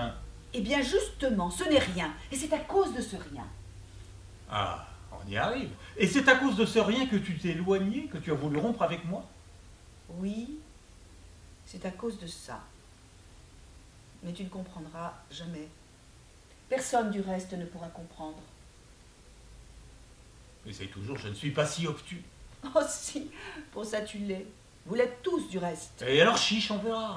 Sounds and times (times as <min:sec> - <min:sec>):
Speech: 0:04.5 - 0:09.3.